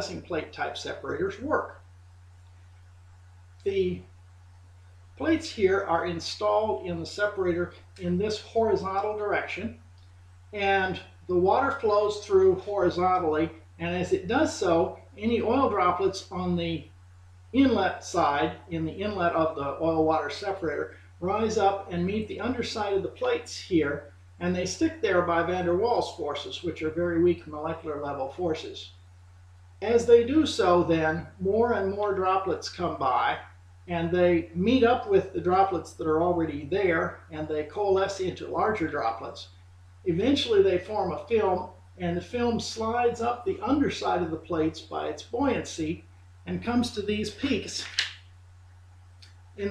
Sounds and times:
Speech: 0:00.0 - 0:01.8, 0:03.7 - 0:04.0, 0:05.2 - 0:09.8, 0:10.5 - 0:16.9, 0:17.6 - 0:28.9, 0:29.8 - 0:39.5, 0:40.1 - 0:48.1.

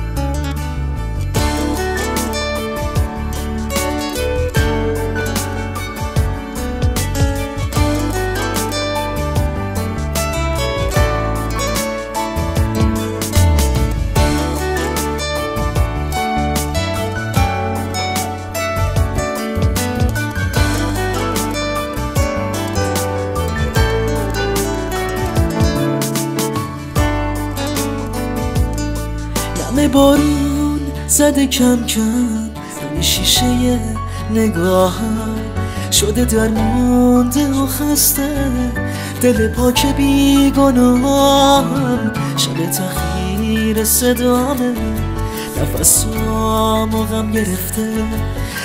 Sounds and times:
Sad music: 0:00.0 - 0:48.6.

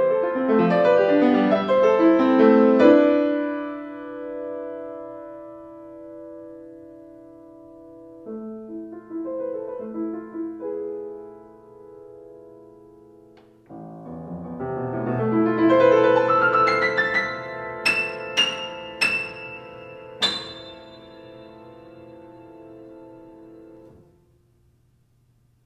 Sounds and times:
Music: 0:00.0 - 0:24.8.

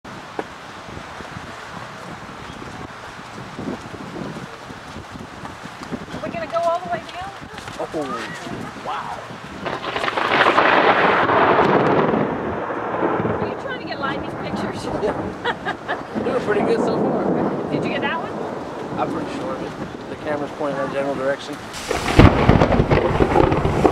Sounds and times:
Wind: 0:00.0 - 0:23.9.

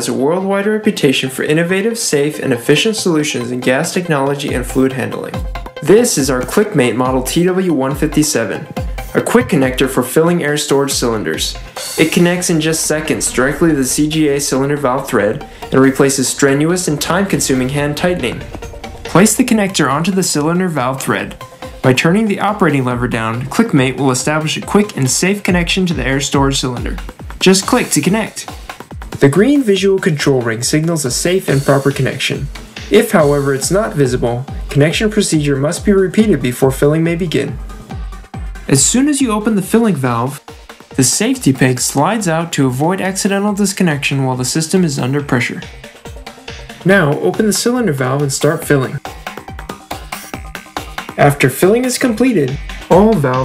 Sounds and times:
Speech: 0:00.0 - 0:18.5, 0:19.1 - 0:28.6, 0:29.2 - 0:37.6, 0:38.7 - 0:40.4, 0:41.0 - 0:45.7, 0:46.8 - 0:49.0, 0:51.2 - 0:53.4
Music: 0:00.0 - 0:53.4.

